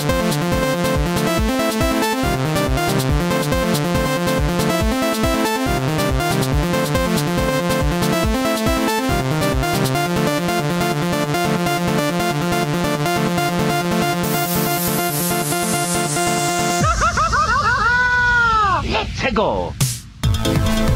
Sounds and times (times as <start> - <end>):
Speech: 18.8 - 19.8.